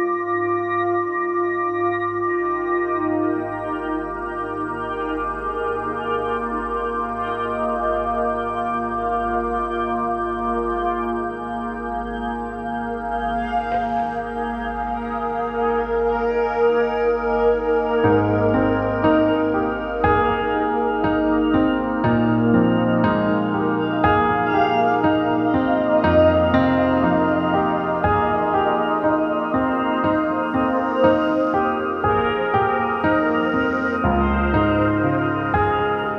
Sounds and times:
Music: 0:00.0 - 0:36.1.

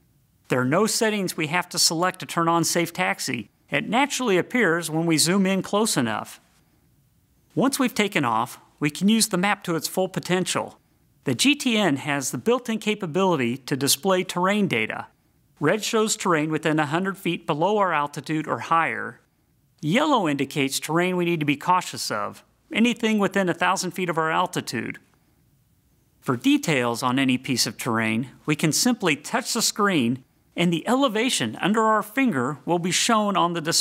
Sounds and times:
Speech: 0:00.5 - 0:06.5, 0:07.5 - 0:25.1, 0:26.2 - 0:33.8.

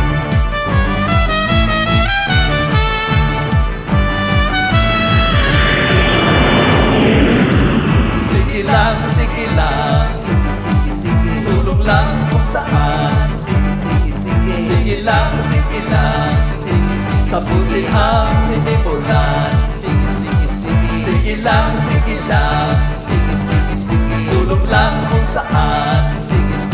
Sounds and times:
Pop music: 0:00.0 - 0:26.7.

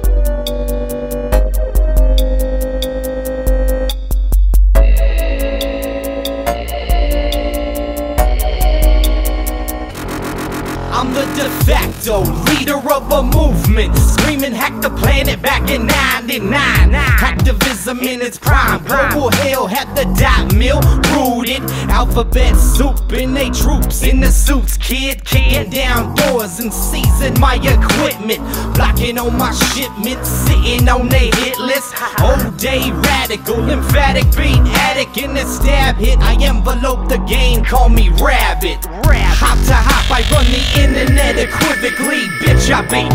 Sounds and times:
Music: 0:00.0 - 0:43.1.

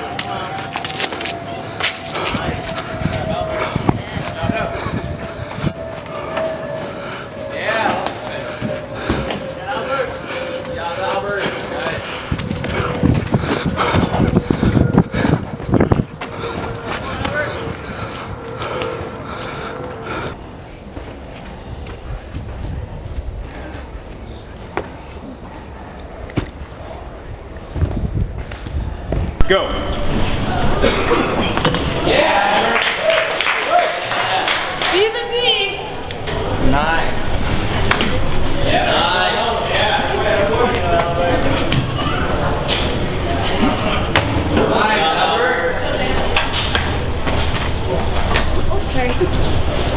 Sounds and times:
Run: 0:00.0 - 0:44.8, 0:45.4 - 0:49.9
Outside, urban or manmade: 0:00.0 - 0:49.9.

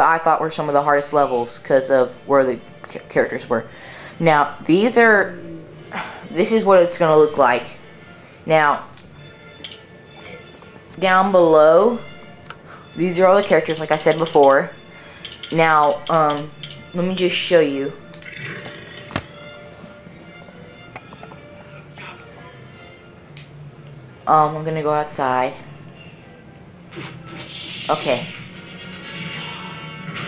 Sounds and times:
Speech: 0:00.0 - 0:05.3, 0:13.0 - 0:14.7, 0:15.6 - 0:18.0, 0:27.9 - 0:28.3
Music: 0:00.0 - 0:30.2.

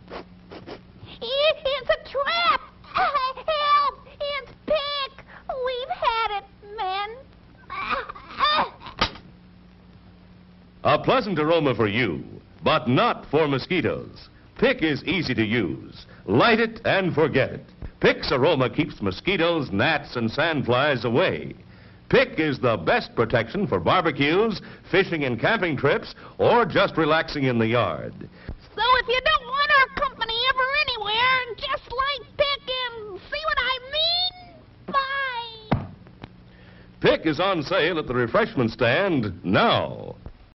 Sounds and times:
Speech: 0:10.8 - 0:35.7, 0:37.0 - 0:40.3.

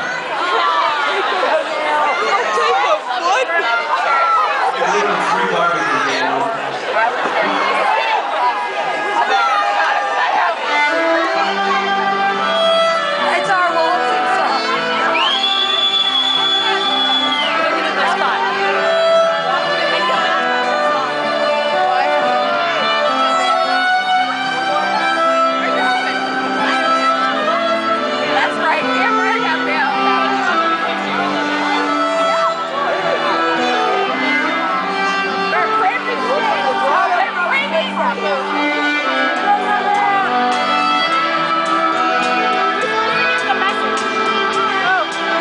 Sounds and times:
Speech: 0:00.0 - 0:11.7, 0:17.5 - 0:27.6, 0:28.2 - 0:34.6, 0:35.3 - 0:40.4
Sad music: 0:08.8 - 0:45.4.

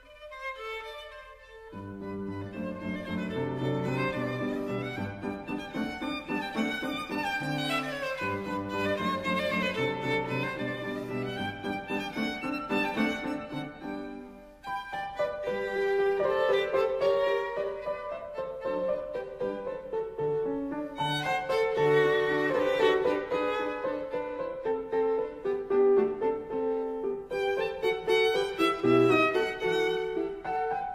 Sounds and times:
Violin, fiddle: 0:00.0 - 0:30.9.

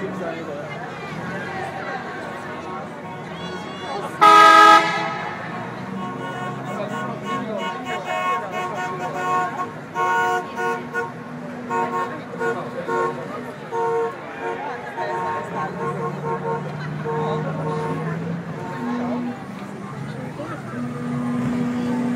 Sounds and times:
Car: 0:00.0 - 0:22.1
Speech: 0:00.0 - 0:22.1.

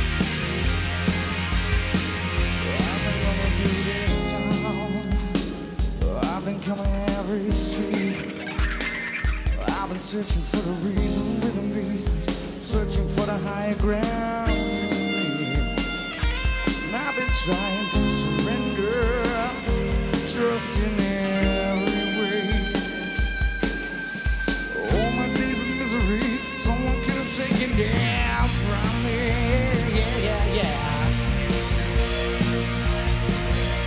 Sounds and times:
Music: 0:00.0 - 0:33.8.

